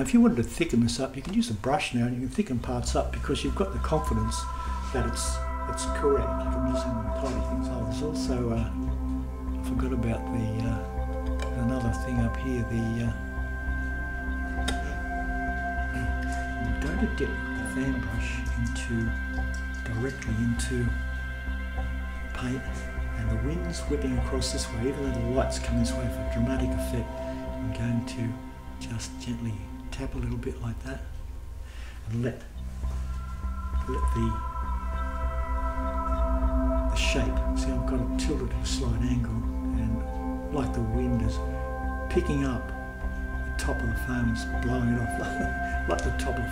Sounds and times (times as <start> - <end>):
Speech: 0.0 - 8.8, 9.6 - 13.2, 14.7 - 15.0, 15.9 - 19.2, 19.8 - 21.0, 22.3 - 31.1, 32.1 - 32.5, 33.8 - 34.4, 36.9 - 41.5, 42.1 - 42.8, 43.6 - 46.5
Music: 0.0 - 46.5.